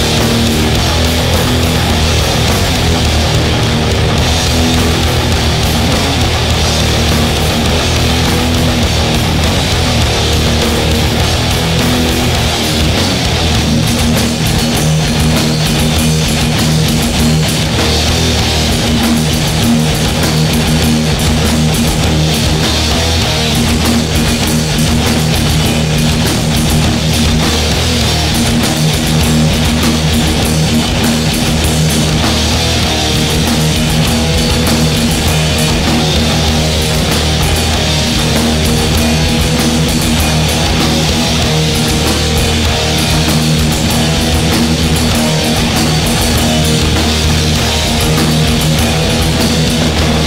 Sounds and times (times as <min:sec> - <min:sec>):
Music: 0:00.0 - 0:50.2.